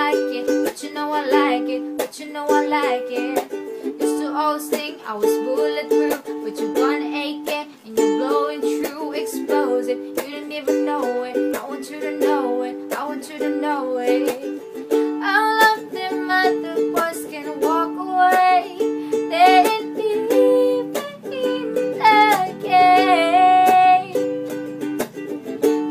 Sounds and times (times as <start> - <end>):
Inside, small room: 0.0 - 25.9
Ukulele: 0.0 - 25.9.